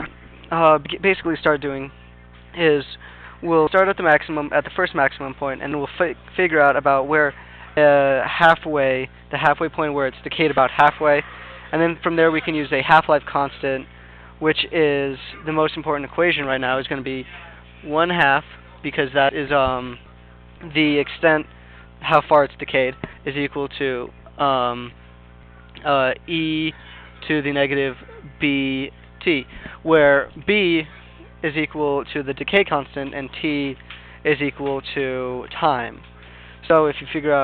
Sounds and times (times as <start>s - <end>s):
Speech: 0.0s - 25.0s, 25.6s - 37.4s.